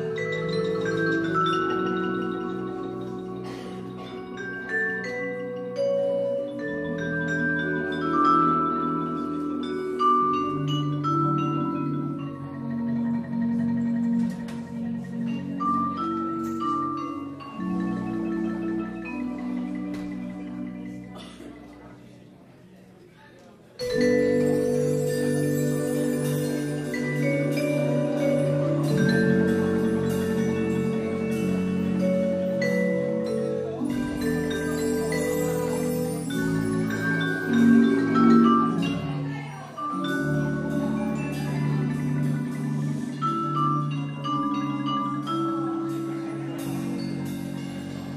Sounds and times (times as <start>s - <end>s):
Percussion: 0.0s - 23.0s, 23.6s - 48.1s.